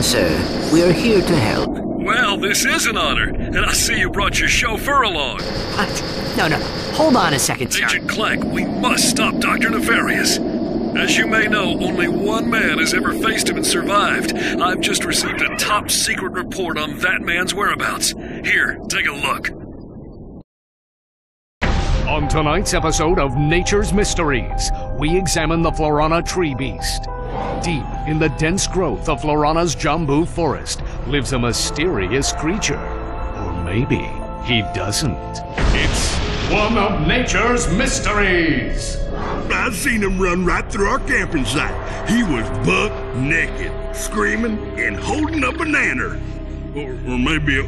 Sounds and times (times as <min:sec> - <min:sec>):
Speech: 0:00.0 - 0:10.4, 0:11.0 - 0:19.5, 0:22.1 - 0:32.8, 0:33.4 - 0:47.6
Music: 0:21.6 - 0:47.6.